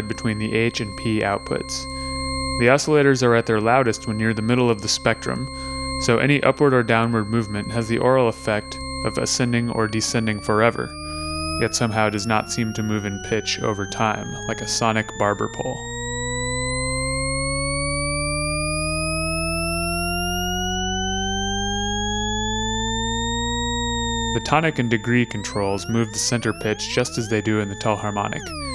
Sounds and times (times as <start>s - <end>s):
Speech: 0.0s - 1.9s, 2.6s - 10.9s, 11.6s - 15.8s, 24.4s - 28.5s
Cacophony: 0.0s - 18.0s, 19.1s - 28.7s.